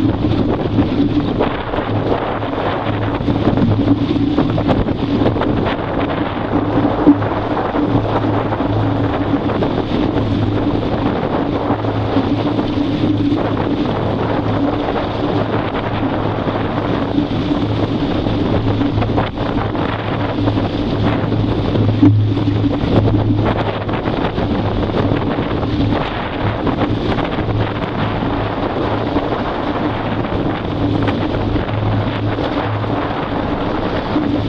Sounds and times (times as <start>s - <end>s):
Motorboat, speedboat: 0.0s - 34.4s
Waves, surf: 0.0s - 34.4s
Wind noise (microphone): 0.0s - 34.4s.